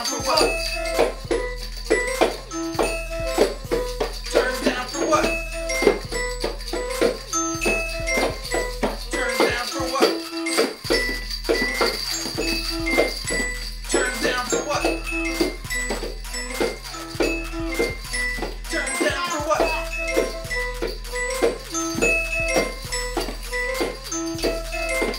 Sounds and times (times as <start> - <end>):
Music: 0.0 - 25.1.